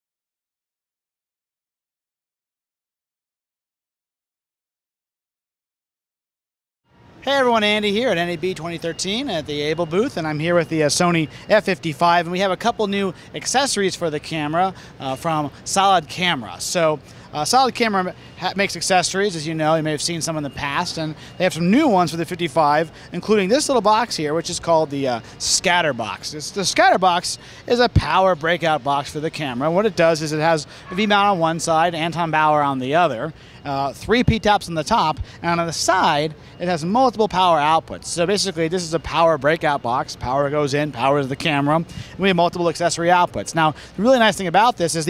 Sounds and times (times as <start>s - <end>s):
Speech: 7.2s - 45.1s.